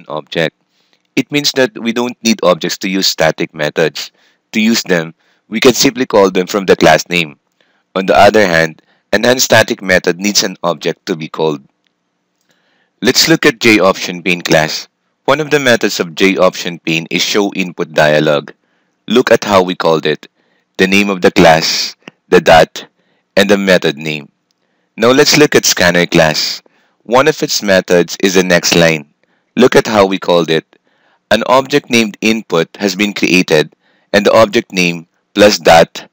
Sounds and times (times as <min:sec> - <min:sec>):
Speech: 0:00.0 - 0:00.5, 0:01.2 - 0:07.4, 0:08.0 - 0:11.6, 0:13.0 - 0:24.3, 0:25.0 - 0:36.1.